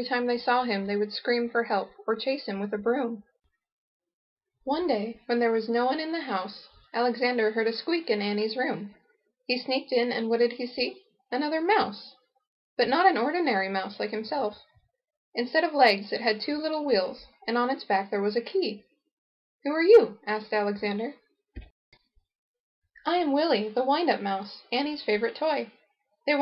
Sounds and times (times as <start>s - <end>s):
Speech: 0.0s - 3.2s, 4.7s - 8.9s, 9.5s - 12.2s, 12.8s - 14.6s, 15.4s - 18.8s, 19.7s - 21.2s, 23.0s - 25.7s.